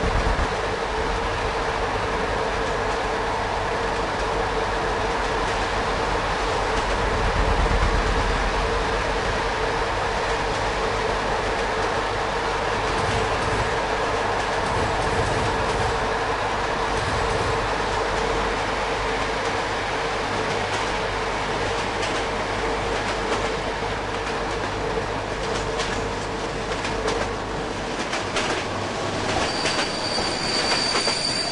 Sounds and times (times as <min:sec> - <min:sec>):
Railroad car, train wagon: 0:00.0 - 0:31.5
Train: 0:00.0 - 0:31.5.